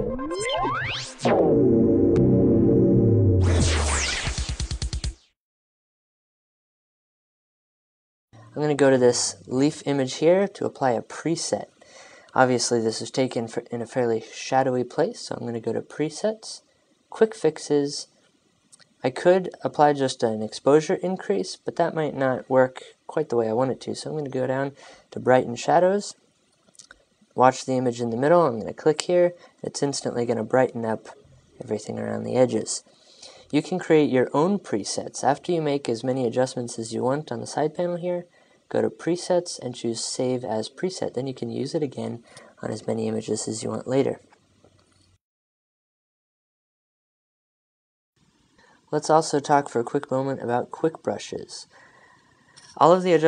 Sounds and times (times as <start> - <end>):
Speech: 8.4 - 18.2, 19.0 - 26.2, 27.4 - 32.9, 33.5 - 44.3, 48.9 - 51.8, 52.8 - 53.2.